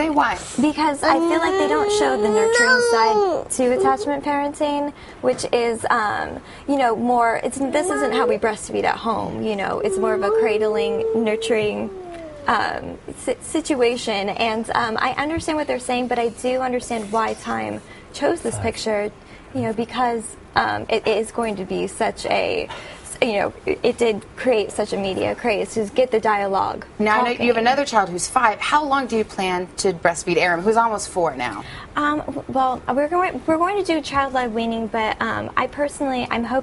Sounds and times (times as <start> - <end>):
Speech: 0.0 - 11.9, 12.5 - 36.6
Inside, small room: 0.0 - 36.6.